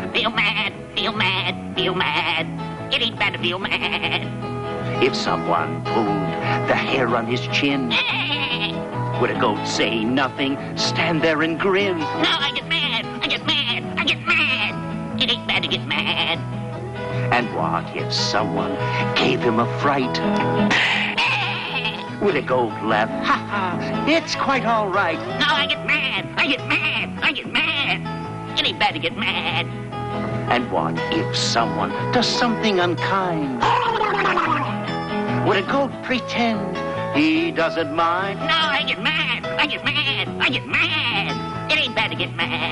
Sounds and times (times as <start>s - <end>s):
Music: 0.0s - 42.7s
Speech: 5.0s - 8.1s, 17.3s - 20.2s, 30.5s - 34.0s.